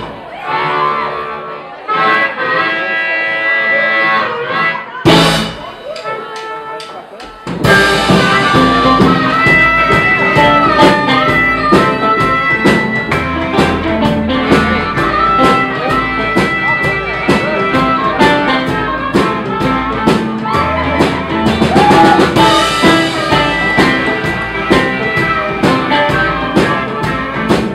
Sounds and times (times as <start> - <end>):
Music: 0.0 - 27.7.